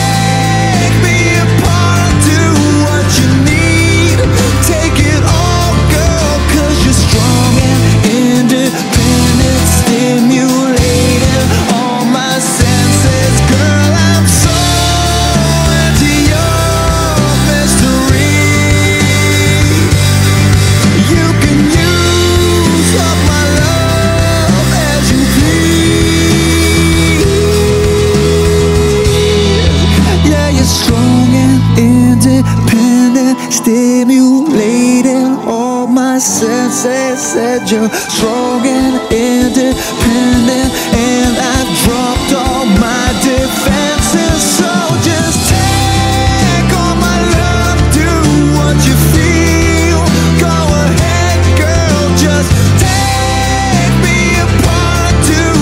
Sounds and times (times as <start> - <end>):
Grunge: 0.0 - 55.6.